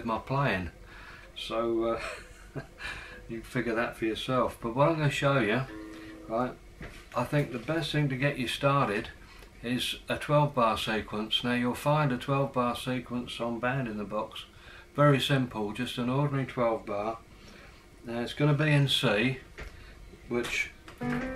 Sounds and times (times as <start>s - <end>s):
Speech: 0.0s - 0.8s, 1.4s - 2.0s, 3.3s - 5.7s, 6.3s - 6.6s, 7.2s - 17.2s, 18.1s - 19.5s, 20.3s - 20.8s.